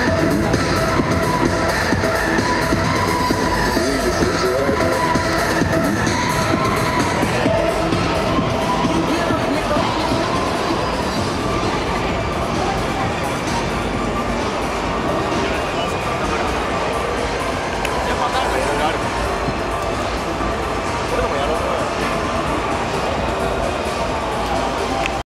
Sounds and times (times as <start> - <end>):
Music: 0.0 - 25.2
Speech: 3.6 - 5.0, 8.8 - 19.2, 21.0 - 23.7.